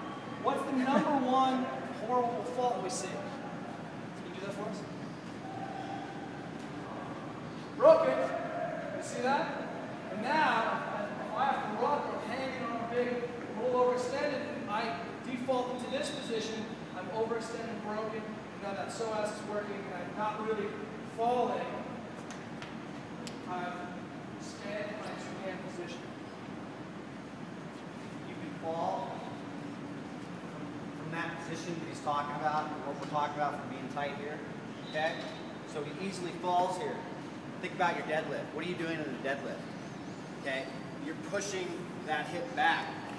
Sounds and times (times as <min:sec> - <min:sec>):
Inside, large room or hall: 0:00.0 - 0:43.1
Speech: 0:00.4 - 0:03.4, 0:04.2 - 0:04.9, 0:07.8 - 0:22.0, 0:23.5 - 0:26.1, 0:28.2 - 0:29.4, 0:31.0 - 0:39.7, 0:40.4 - 0:43.1.